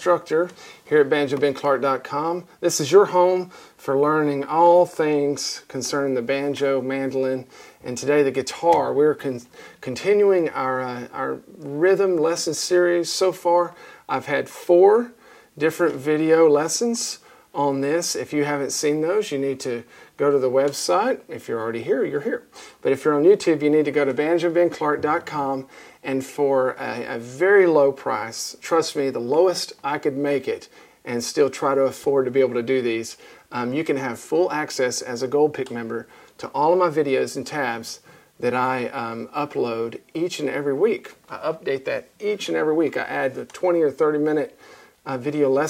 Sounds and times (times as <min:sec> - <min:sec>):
Speech: 0:00.0 - 0:45.6.